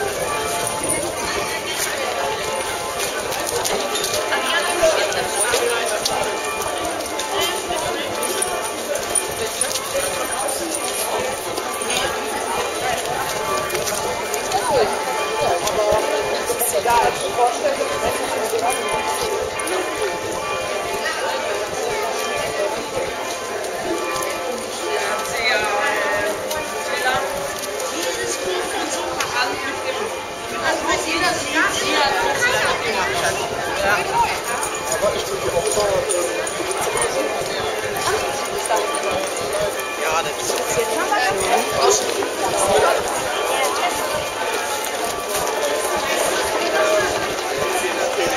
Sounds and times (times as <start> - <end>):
Speech: 0.0 - 48.3.